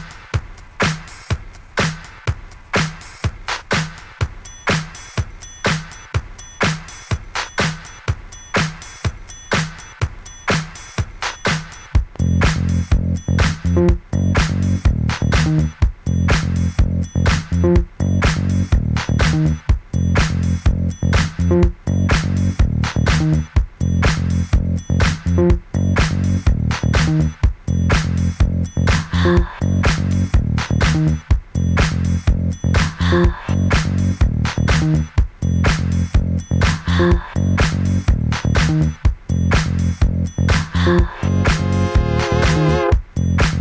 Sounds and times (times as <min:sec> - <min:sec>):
Funk: 0:00.0 - 0:43.6.